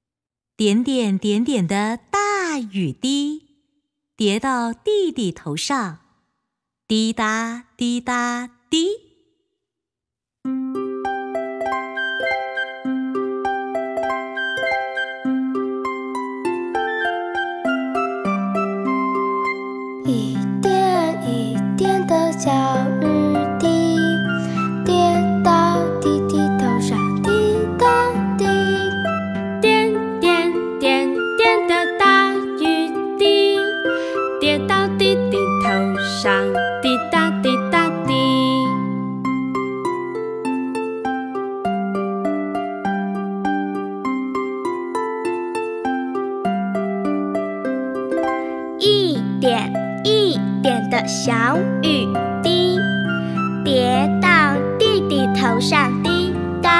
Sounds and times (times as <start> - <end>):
Music: 10.5 - 56.7.